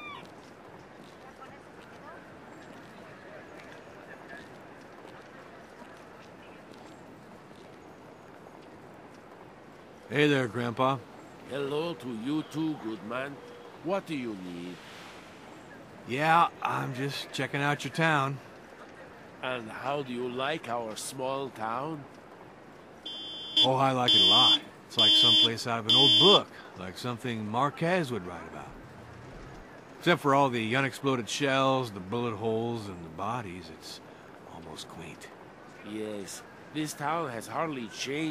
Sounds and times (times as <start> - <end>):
Speech: 10.1 - 14.8, 16.1 - 22.0, 23.6 - 28.8, 30.0 - 38.3.